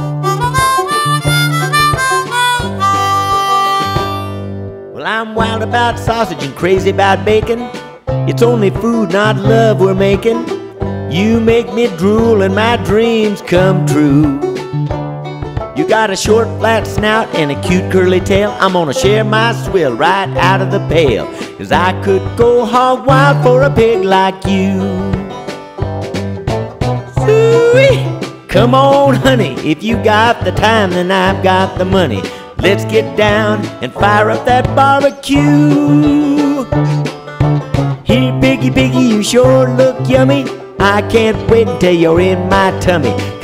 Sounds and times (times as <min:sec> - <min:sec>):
Music: 0:00.0 - 0:43.4.